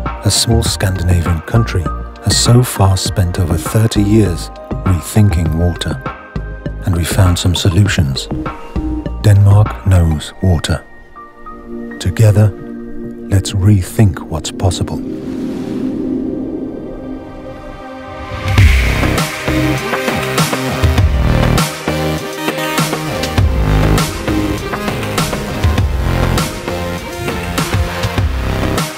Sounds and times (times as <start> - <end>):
Music: 0.0 - 16.2, 16.8 - 28.9
Speech: 0.2 - 6.1, 6.8 - 8.3, 9.2 - 10.9, 12.0 - 12.6, 13.3 - 15.0.